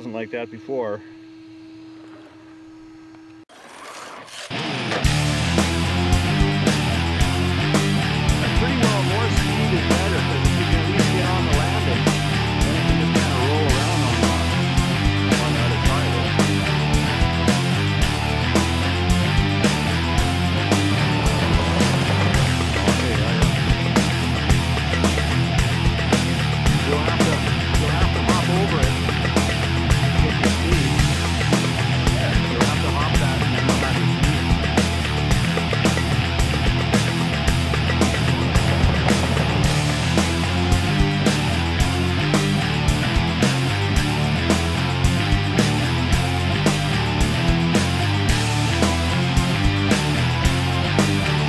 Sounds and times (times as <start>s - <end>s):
Speech: 0.0s - 1.1s, 8.4s - 14.6s, 15.2s - 16.6s, 22.7s - 23.7s, 26.7s - 29.2s, 30.1s - 31.2s, 32.0s - 34.4s
Music: 4.5s - 51.4s.